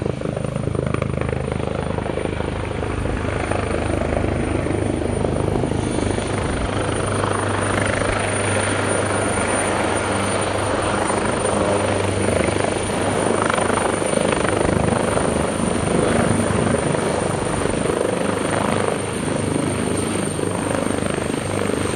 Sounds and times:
Helicopter: 0.0 - 21.9.

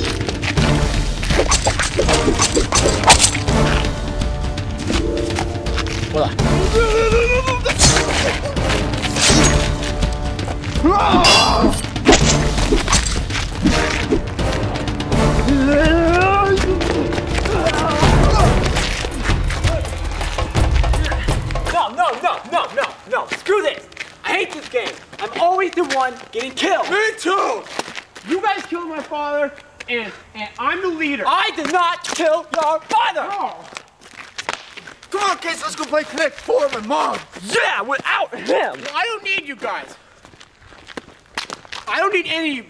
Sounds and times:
Music: 0.0 - 21.8
Speech: 6.2 - 7.8, 21.7 - 27.7, 28.3 - 33.7, 35.1 - 40.0, 41.9 - 42.7.

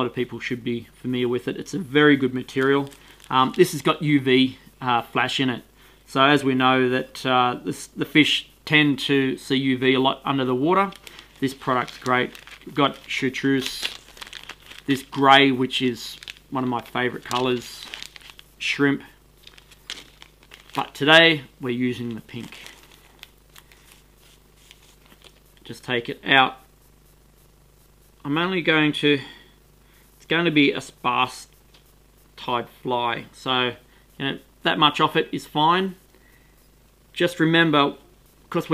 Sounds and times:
Speech: 0.0 - 14.0, 14.9 - 18.0, 18.6 - 19.2, 20.8 - 22.7, 25.6 - 26.7, 28.2 - 29.4, 30.2 - 31.5, 32.4 - 36.0, 37.2 - 38.7
Crumpling, crinkling: 2.4 - 4.0, 10.7 - 18.5, 19.4 - 21.1, 21.9 - 25.7.

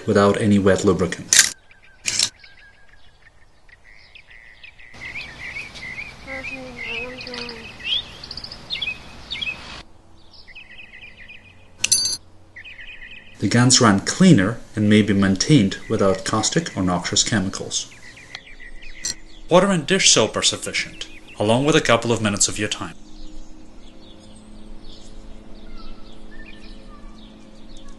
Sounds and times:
Speech: 0.0 - 1.3, 6.3 - 7.7, 13.4 - 17.9, 19.5 - 23.0.

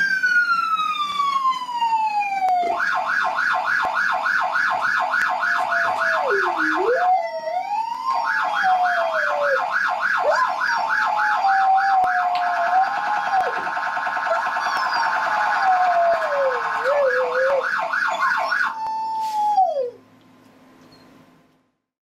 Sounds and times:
Police car (siren): 0.0 - 20.0.

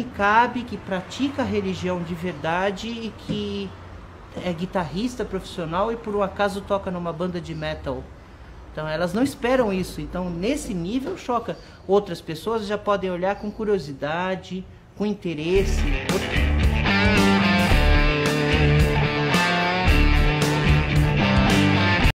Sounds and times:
Speech: 0.0 - 3.8, 4.4 - 8.1, 8.8 - 16.1
Heavy metal: 15.6 - 22.1
Musical instrument: 15.6 - 22.1.

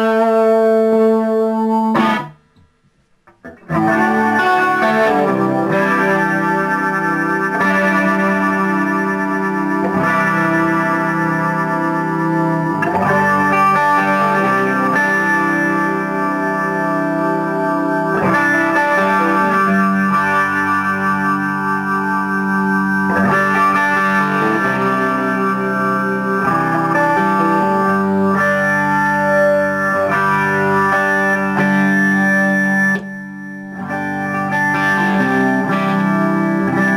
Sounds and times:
Chorus effect: 0.0 - 36.9
Inside, small room: 0.0 - 36.9
Music: 0.0 - 36.9.

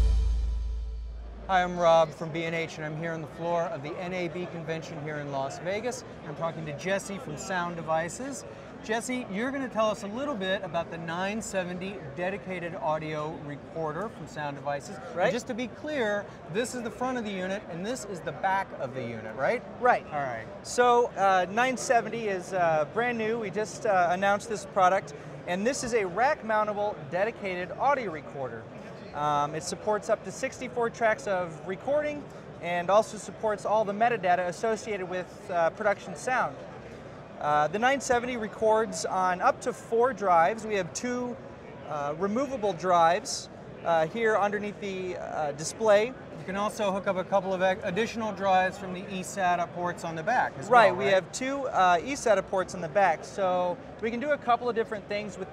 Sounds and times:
Speech: 1.5 - 36.6, 37.4 - 55.5.

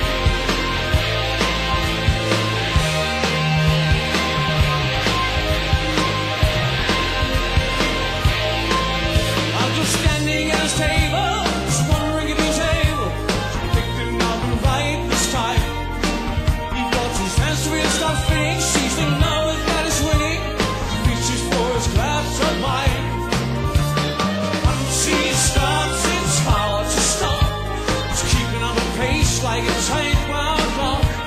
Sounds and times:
Music: 0.0 - 31.2.

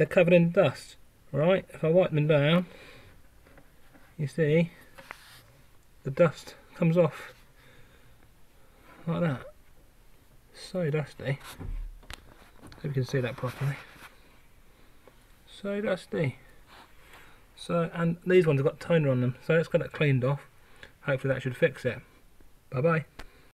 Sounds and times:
Speech: 0.0 - 2.7, 4.2 - 4.8, 6.0 - 7.4, 9.0 - 9.6, 10.5 - 11.6, 12.8 - 13.9, 15.5 - 16.5, 17.6 - 22.1, 22.7 - 23.1.

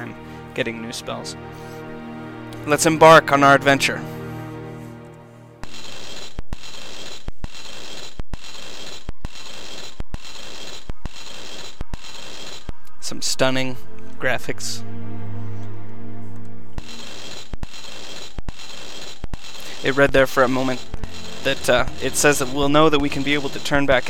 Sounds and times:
Speech: 0.0 - 1.4, 2.6 - 4.1, 13.0 - 14.9, 19.8 - 20.8, 21.4 - 24.1
Music: 0.0 - 5.8, 11.7 - 18.4, 19.6 - 24.1.

